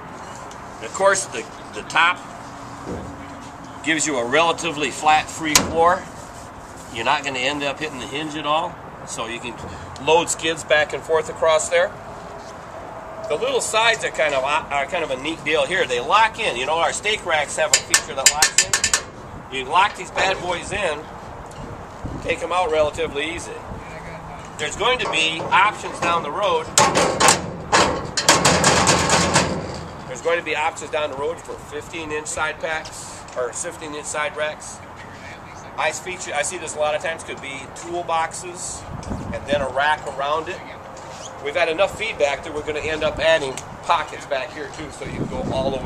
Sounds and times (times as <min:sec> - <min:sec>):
Outside, urban or manmade: 0:00.0 - 0:45.8
Speech: 0:00.8 - 0:02.2, 0:03.8 - 0:06.1, 0:06.9 - 0:11.9, 0:13.3 - 0:18.8, 0:19.5 - 0:21.1, 0:22.3 - 0:26.7, 0:30.1 - 0:40.8, 0:41.4 - 0:45.8.